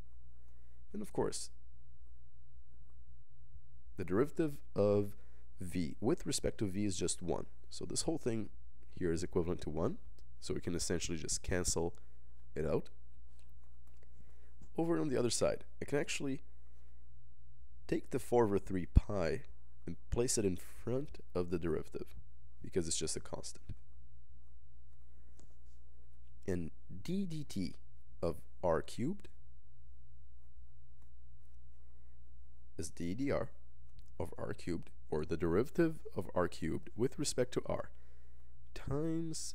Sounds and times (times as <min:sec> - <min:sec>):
Inside, small room: 0:00.0 - 0:39.5
Speech: 0:00.9 - 0:01.6, 0:04.0 - 0:12.9, 0:14.8 - 0:16.4, 0:17.9 - 0:23.8, 0:26.5 - 0:29.3, 0:32.8 - 0:33.6, 0:34.2 - 0:37.9, 0:38.7 - 0:39.5.